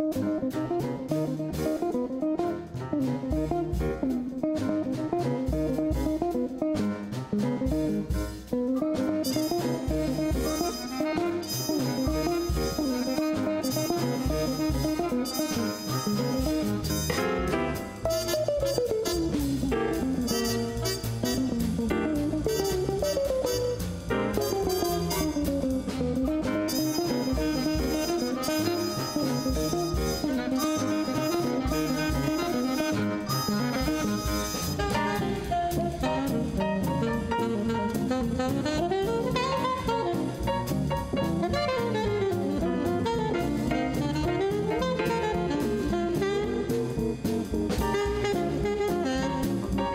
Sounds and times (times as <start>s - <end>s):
Electric guitar: 0.0s - 49.9s
Strum: 0.0s - 49.9s.